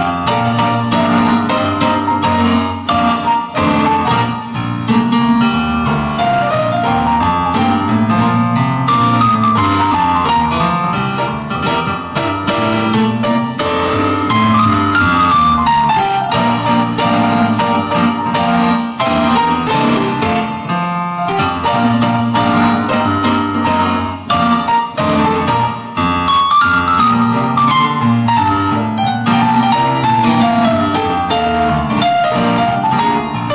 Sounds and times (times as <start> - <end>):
Music: 0.0 - 33.5.